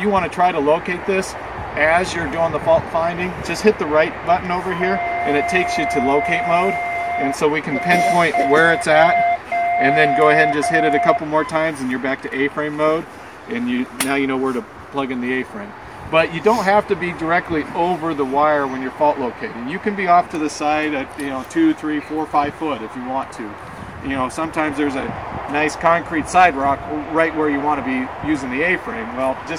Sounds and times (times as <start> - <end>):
Speech: 0.0 - 9.2, 9.8 - 29.5
Outside, urban or manmade: 0.0 - 29.5.